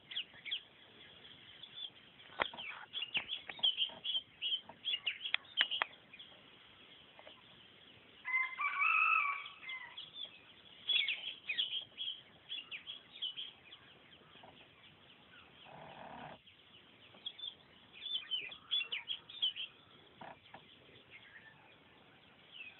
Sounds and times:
Chirp, tweet: 0:00.0 - 0:22.7
Outside, rural or natural: 0:00.0 - 0:22.7.

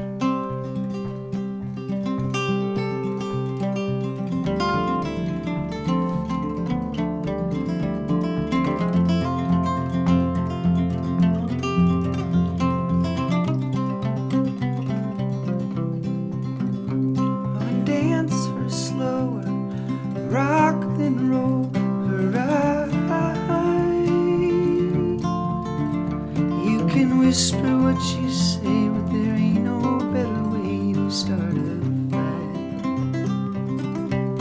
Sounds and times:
Music: 0:00.0 - 0:34.4.

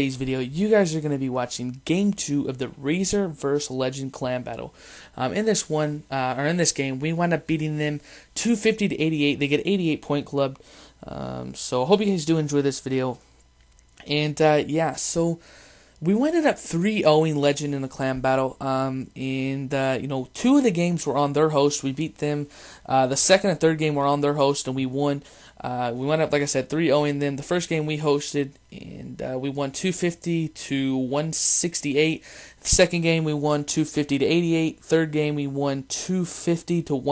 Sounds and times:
Speech: 0:00.0 - 0:13.2, 0:14.0 - 0:15.4, 0:16.0 - 0:37.1.

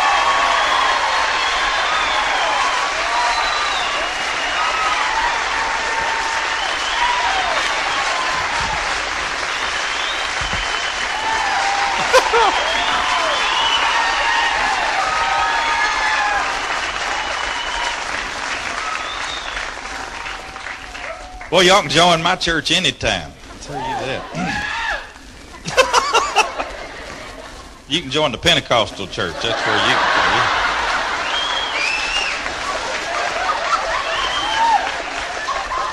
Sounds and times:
Chuckle, chortle: 0:12.0 - 0:12.7, 0:25.6 - 0:26.7
Snicker: 0:12.0 - 0:13.1, 0:25.6 - 0:27.3, 0:29.4 - 0:31.3, 0:32.6 - 0:34.4
Speech: 0:21.5 - 0:24.4, 0:27.9 - 0:30.5.

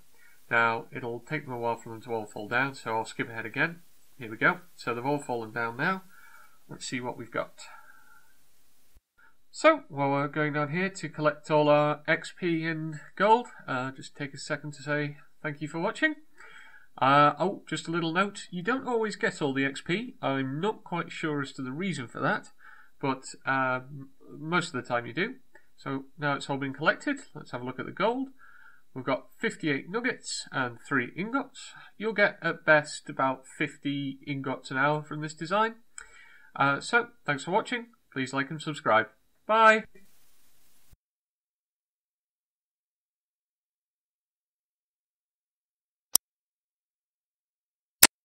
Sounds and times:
Speech: 0:00.5 - 0:06.1, 0:06.7 - 0:07.8, 0:09.5 - 0:16.2, 0:17.0 - 0:28.4, 0:29.0 - 0:35.8, 0:36.6 - 0:40.0.

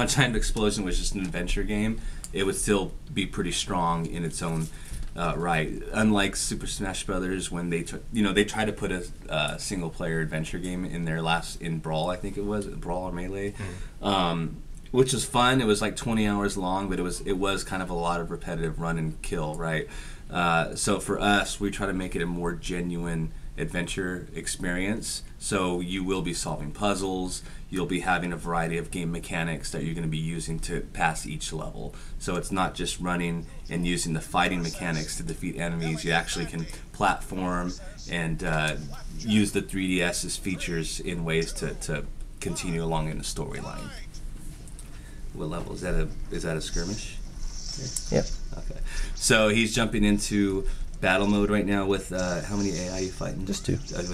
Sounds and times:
Speech: 0:00.0 - 0:44.2, 0:45.4 - 0:47.2, 0:47.8 - 0:54.1.

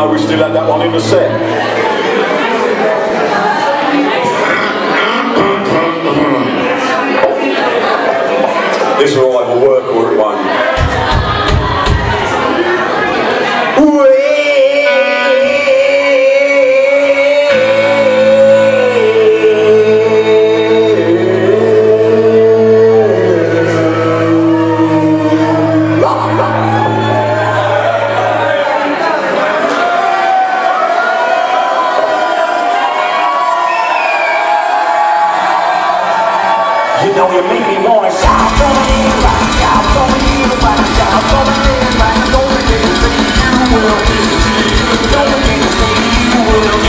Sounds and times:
Music: 0:00.0 - 0:02.6, 0:10.7 - 0:12.8, 0:13.9 - 0:29.2, 0:38.1 - 0:46.8.

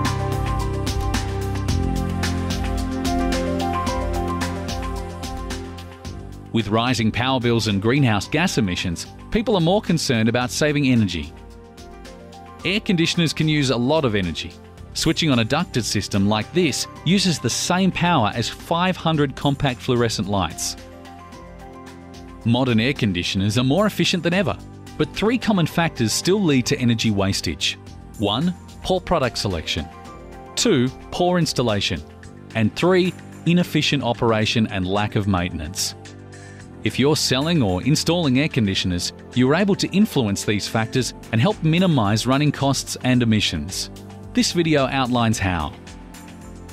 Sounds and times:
Music: 0:00.0 - 0:46.7
Speech: 0:06.5 - 0:11.3, 0:12.6 - 0:20.8, 0:22.4 - 0:29.9, 0:30.6 - 0:32.0, 0:32.6 - 0:36.0, 0:36.8 - 0:45.8.

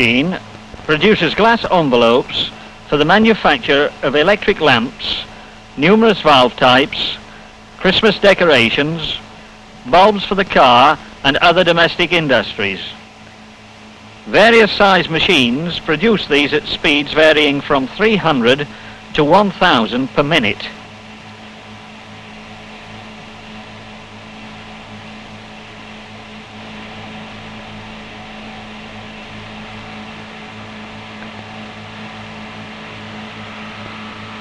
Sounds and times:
Speech: 0:00.0 - 0:09.2, 0:09.9 - 0:13.0, 0:14.3 - 0:20.8.

